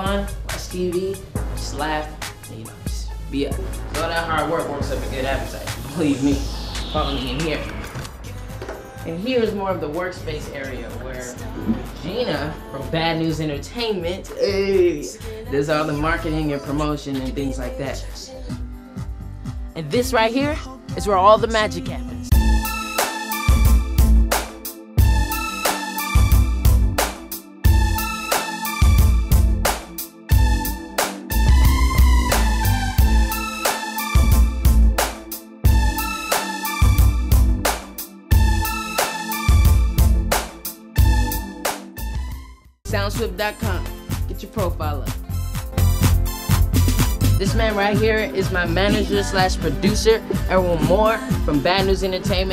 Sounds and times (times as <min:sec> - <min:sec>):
Speech: 0:00.0 - 0:06.4, 0:09.0 - 0:11.4, 0:12.0 - 0:18.3, 0:19.8 - 0:22.3, 0:42.9 - 0:45.2, 0:47.4 - 0:52.5
Music: 0:00.0 - 0:52.5.